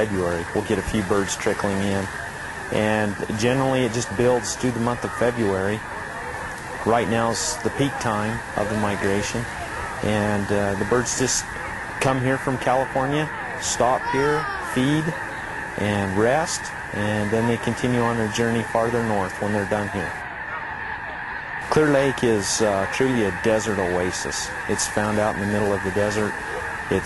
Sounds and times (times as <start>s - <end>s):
Speech: 0.0s - 2.1s, 2.7s - 5.8s, 6.8s - 15.2s, 15.8s - 20.2s, 21.7s - 27.0s.